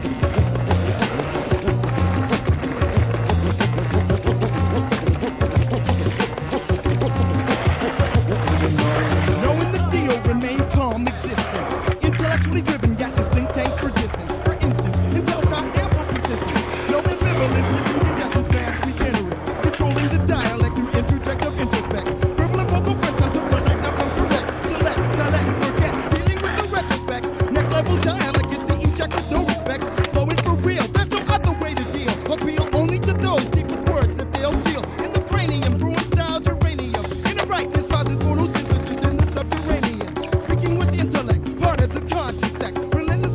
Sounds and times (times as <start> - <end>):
Music: 0.0 - 43.3.